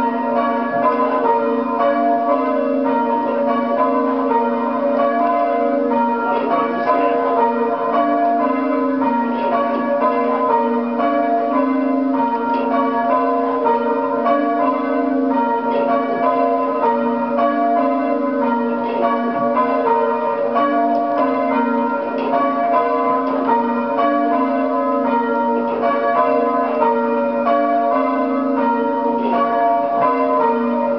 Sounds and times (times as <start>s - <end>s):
Change ringing (campanology): 0.0s - 30.9s.